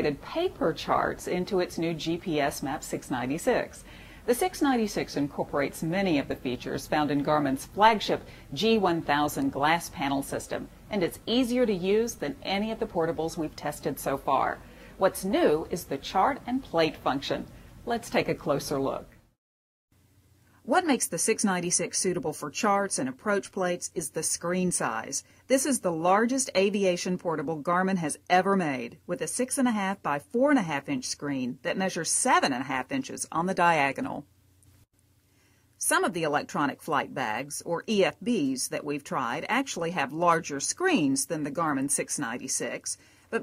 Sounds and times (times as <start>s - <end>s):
Speech: 0.0s - 19.1s, 20.7s - 34.3s, 35.8s - 43.4s.